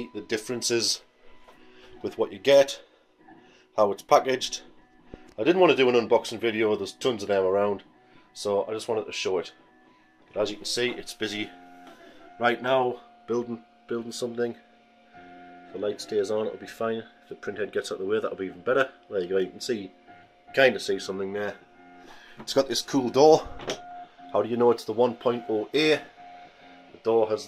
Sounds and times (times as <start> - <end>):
Speech: 0.0 - 1.0, 2.0 - 2.8, 3.8 - 4.7, 5.4 - 7.8, 8.4 - 9.5, 10.4 - 11.5, 12.4 - 14.6, 15.8 - 19.9, 20.6 - 21.6, 22.4 - 23.6, 24.4 - 26.1, 27.0 - 27.4.